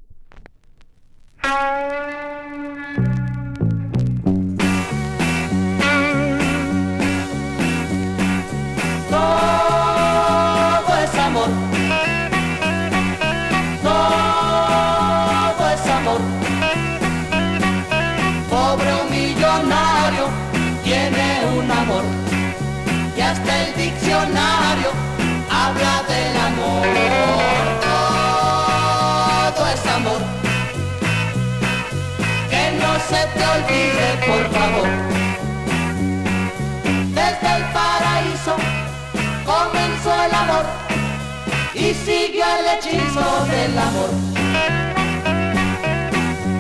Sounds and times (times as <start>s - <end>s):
Jingle (music): 15.3s - 41.8s.